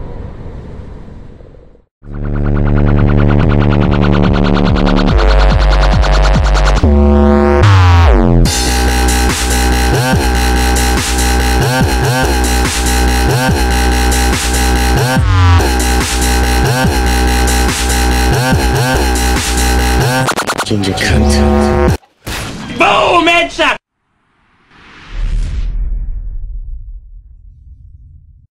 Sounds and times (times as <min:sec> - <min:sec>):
Dubstep: 0:02.2 - 0:22.0
Speech: 0:20.7 - 0:21.7, 0:22.7 - 0:23.8.